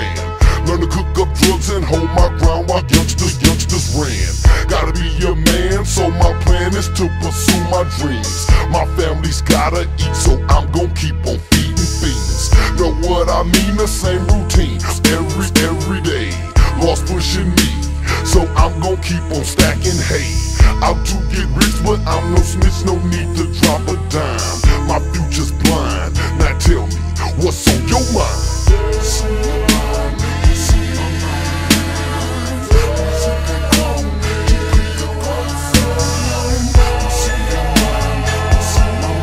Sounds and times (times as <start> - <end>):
Music: 0.0 - 39.2
Rapping: 0.0 - 39.2.